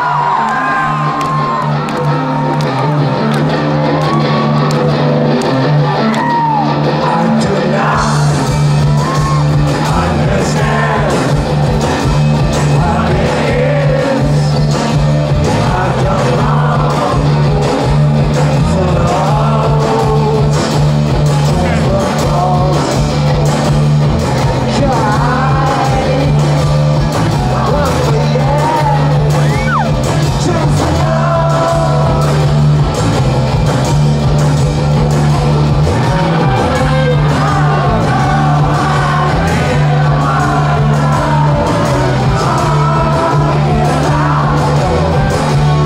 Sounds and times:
Independent music: 0:00.0 - 0:45.8
Rock music: 0:00.0 - 0:45.8
Singing: 0:06.9 - 0:23.3, 0:24.4 - 0:32.6, 0:35.8 - 0:45.8.

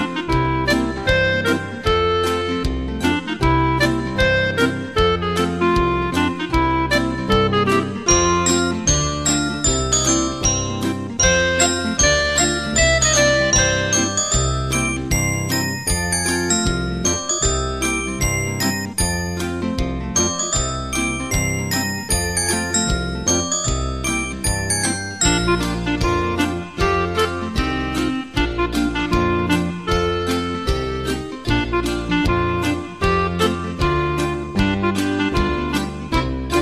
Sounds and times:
Music: 0:00.0 - 0:36.6.

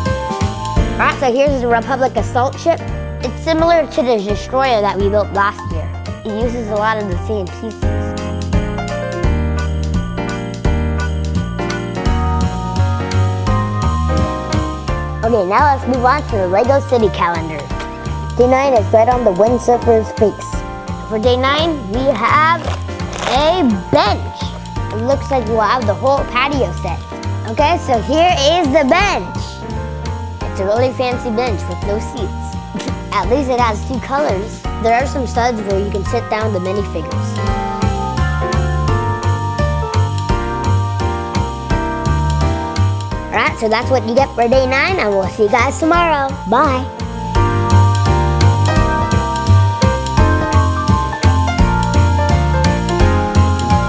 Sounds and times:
Music: 0:00.0 - 0:53.8
Child speech, kid speaking: 0:01.0 - 0:08.1, 0:15.2 - 0:17.8, 0:18.4 - 0:29.6, 0:30.6 - 0:37.4, 0:43.3 - 0:46.9.

